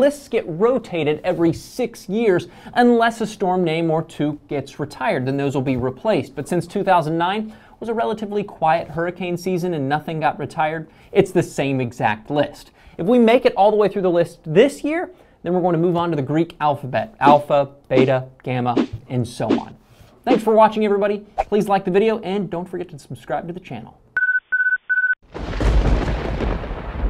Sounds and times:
Speech: 0.0s - 24.0s.

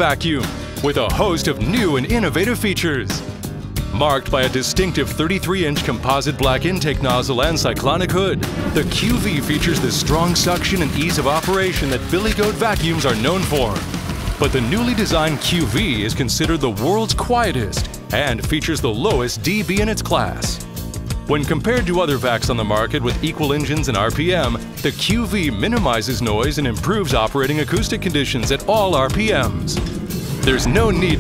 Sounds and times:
Speech: 0.0s - 3.2s, 3.9s - 20.6s, 21.3s - 29.8s, 30.4s - 31.2s
Music: 0.0s - 31.2s.

